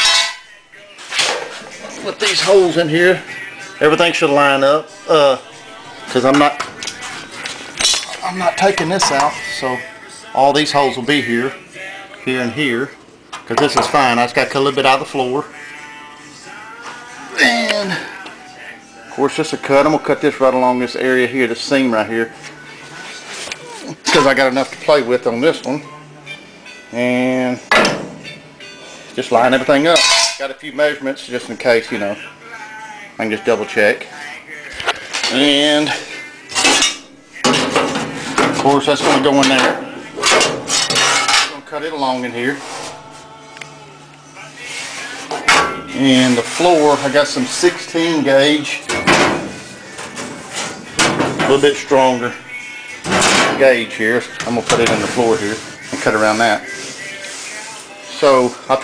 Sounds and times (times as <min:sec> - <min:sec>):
Music: 0:00.0 - 0:58.8
Speech: 0:01.8 - 0:03.2, 0:06.1 - 0:06.6, 0:08.2 - 0:11.6, 0:12.2 - 0:15.5, 0:19.1 - 0:22.3, 0:23.6 - 0:25.9, 0:29.2 - 0:32.3, 0:35.3 - 0:36.0, 0:38.6 - 0:39.8, 0:41.5 - 0:42.6, 0:45.9 - 0:48.8, 0:51.4 - 0:52.4, 0:53.5 - 0:56.7, 0:58.1 - 0:58.8.